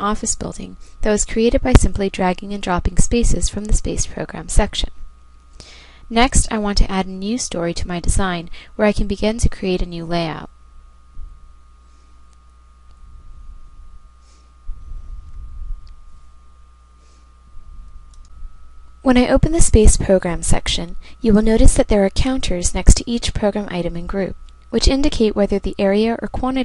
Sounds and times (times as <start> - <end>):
Speech: 0.0 - 5.0, 6.1 - 10.5, 19.1 - 26.6.